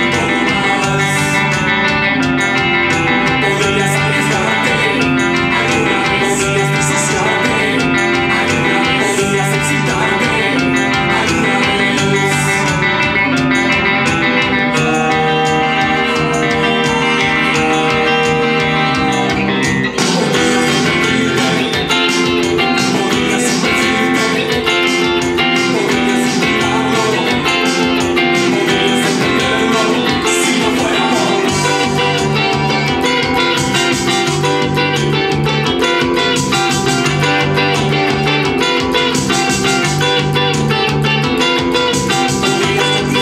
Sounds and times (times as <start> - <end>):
Strum: 0.0 - 43.2.